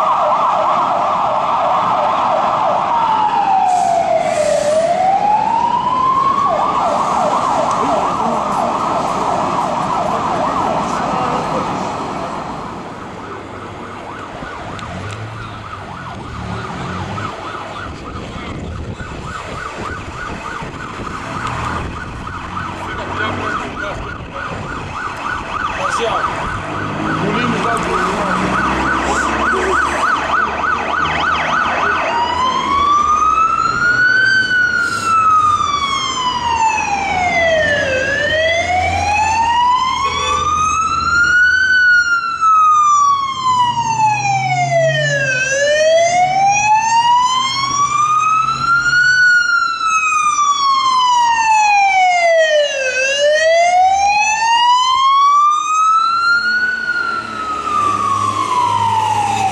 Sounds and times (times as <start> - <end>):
Fire engine, fire truck (siren): 0.0 - 59.5.